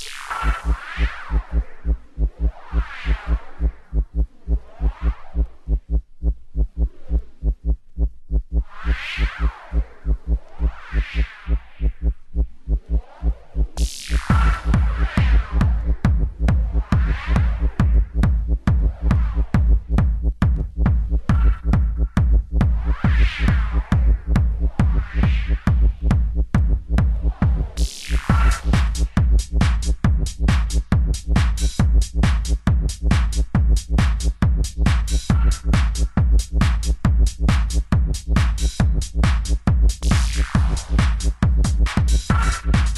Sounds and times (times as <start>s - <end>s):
Electronic music: 0.0s - 42.9s.